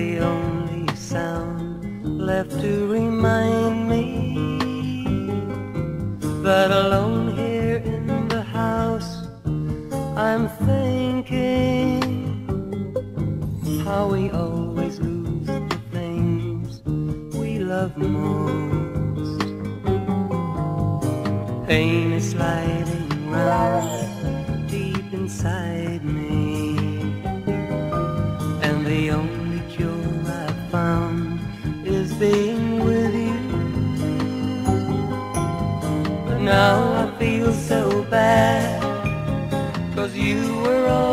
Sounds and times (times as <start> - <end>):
Music: 0.0 - 41.1.